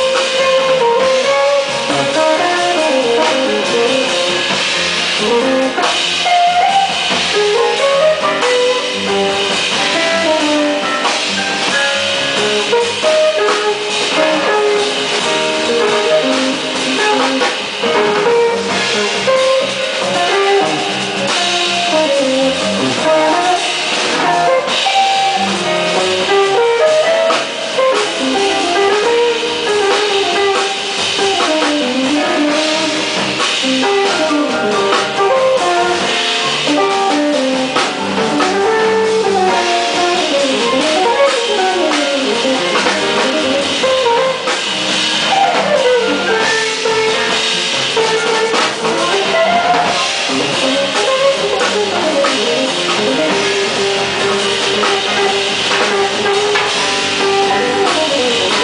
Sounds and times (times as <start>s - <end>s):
Electric guitar: 0.0s - 58.6s.